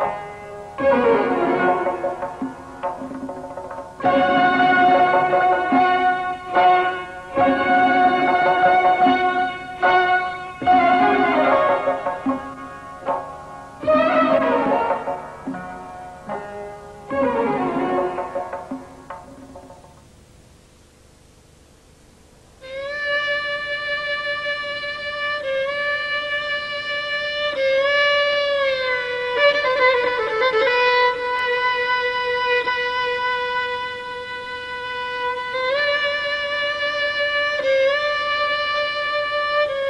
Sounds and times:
Violin, fiddle: 4.0 - 12.8, 13.8 - 15.6, 22.7 - 39.9.

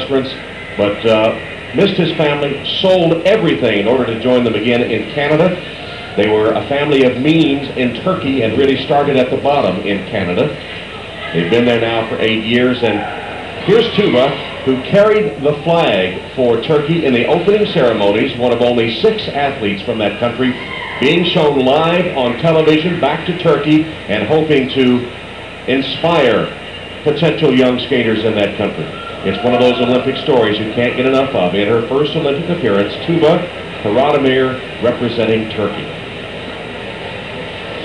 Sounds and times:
Speech: 0.0 - 25.1, 25.7 - 36.0.

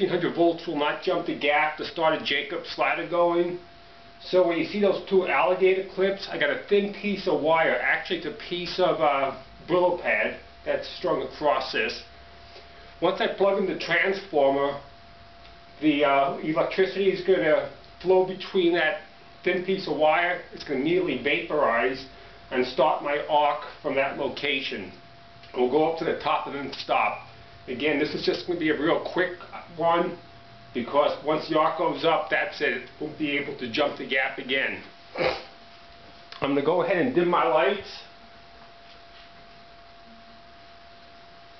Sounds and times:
Speech: 0.0 - 3.6, 4.2 - 12.1, 13.0 - 14.9, 15.8 - 30.2, 30.8 - 34.9, 36.4 - 38.2.

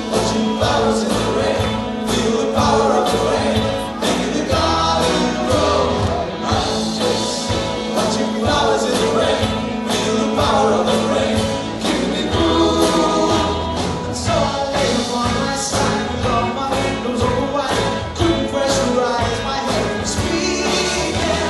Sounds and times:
Music: 0.0 - 21.5.

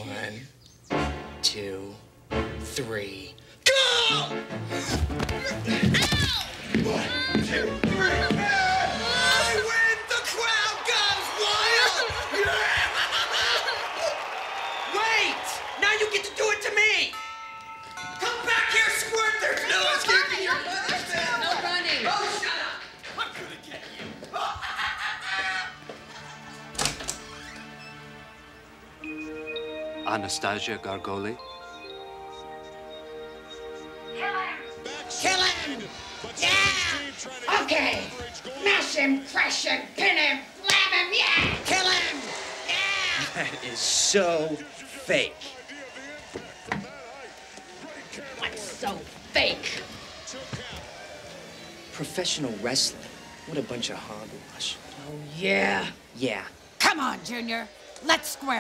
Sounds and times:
Music: 0.0 - 12.5, 14.9 - 40.0, 41.6 - 54.9
Inside, large room or hall: 4.8 - 29.9, 31.4 - 56.1.

